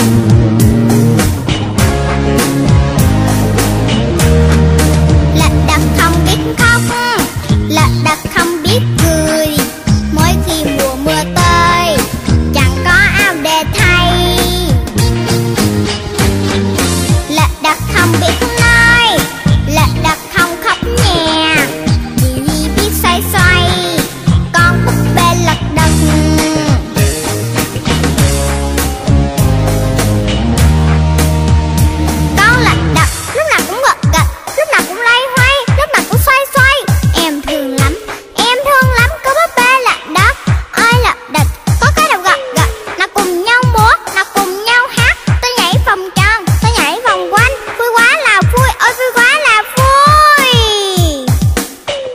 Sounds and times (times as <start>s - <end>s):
Music: 0.0s - 52.1s.